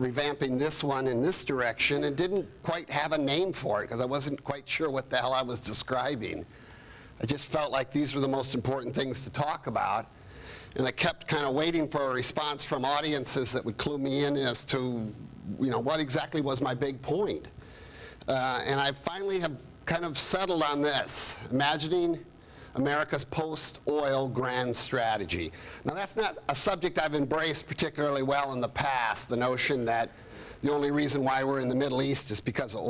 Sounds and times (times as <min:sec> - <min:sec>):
Male speech, man speaking: 0:00.0 - 0:06.5, 0:07.2 - 0:10.1, 0:10.8 - 0:17.5, 0:18.3 - 0:32.9
Narration, monologue: 0:00.0 - 0:32.9.